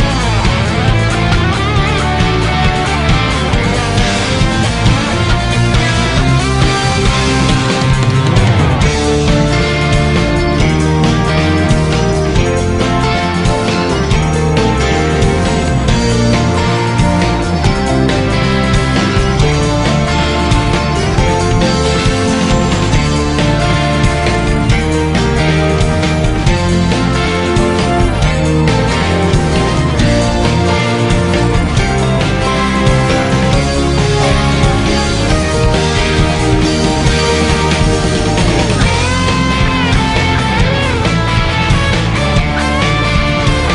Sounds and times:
Funk: 0:00.0 - 0:43.7.

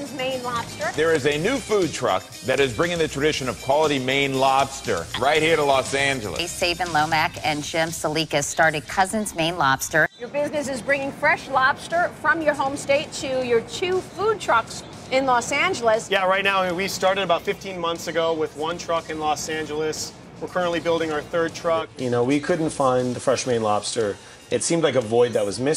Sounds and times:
Music: 0:00.0 - 0:25.7.

